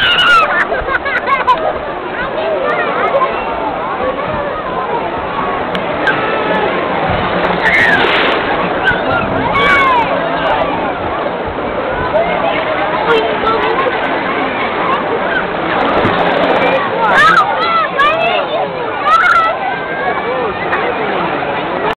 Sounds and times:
Speech: 0:00.0 - 0:21.9
Water: 0:00.0 - 0:21.9.

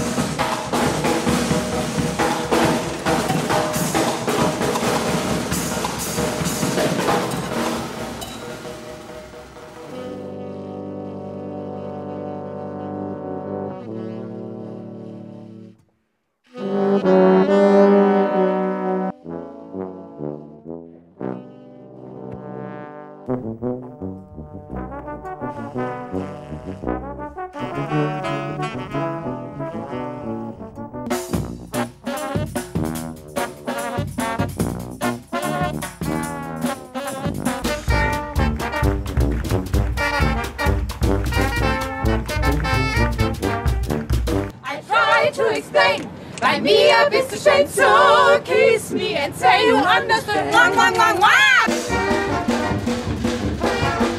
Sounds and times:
Trombone: 0:00.0 - 0:15.8, 0:16.5 - 0:44.6, 0:51.6 - 0:54.1
Saxophone: 0:07.3 - 0:22.5, 0:23.3 - 0:45.2, 0:51.6 - 0:54.1.

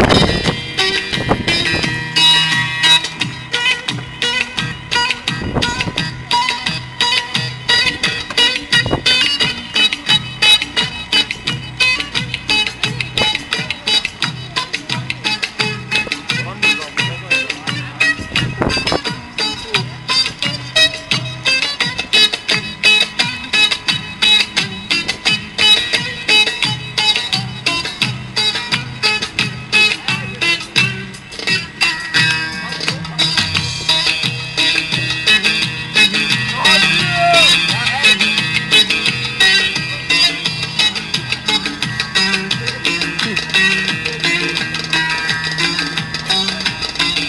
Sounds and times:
Music: 0:00.0 - 0:47.2
Speech: 0:16.3 - 0:18.3, 0:32.5 - 0:34.2, 0:36.5 - 0:38.4, 0:39.5 - 0:40.6.

